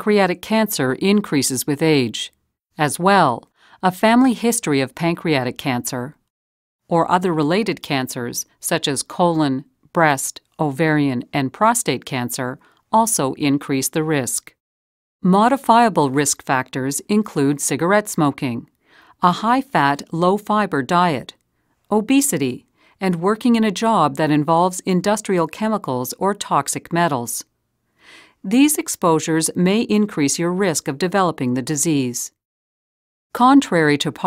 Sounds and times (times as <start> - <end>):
Speech: 0.0 - 6.2, 6.9 - 14.6, 15.2 - 27.5, 28.4 - 32.4, 33.4 - 34.2.